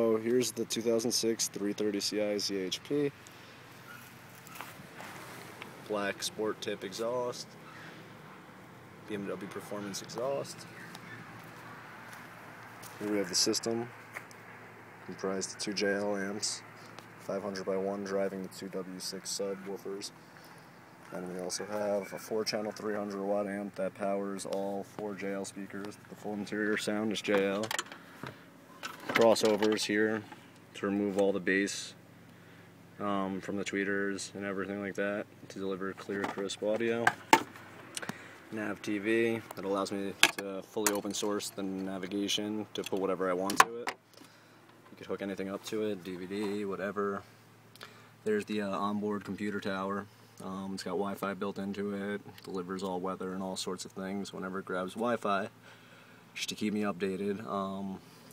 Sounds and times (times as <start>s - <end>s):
Speech: 0.0s - 3.2s, 5.9s - 7.5s, 9.1s - 10.7s, 13.0s - 13.9s, 15.0s - 20.1s, 21.1s - 27.7s, 29.1s - 32.0s, 33.0s - 37.2s, 38.5s - 43.9s, 44.9s - 47.3s, 48.2s - 55.5s, 56.4s - 58.0s.